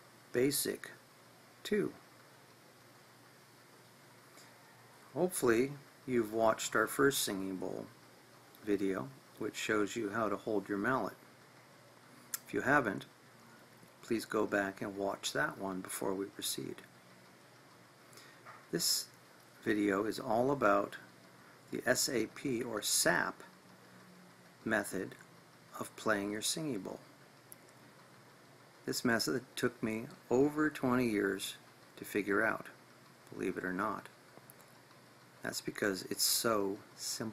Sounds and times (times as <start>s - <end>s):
Speech: 0.3s - 1.0s, 1.6s - 2.0s, 5.2s - 7.9s, 8.6s - 11.2s, 12.4s - 13.1s, 14.0s - 16.9s, 18.7s - 21.0s, 21.7s - 23.5s, 24.7s - 25.2s, 25.8s - 27.0s, 28.9s - 34.1s, 35.4s - 37.3s.